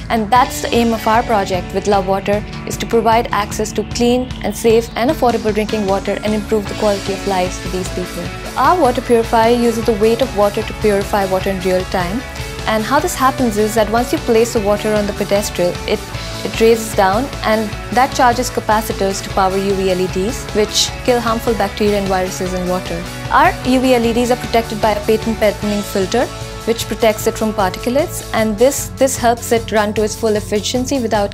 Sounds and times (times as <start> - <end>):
Music: 0.0 - 31.3
Speech: 0.1 - 31.3.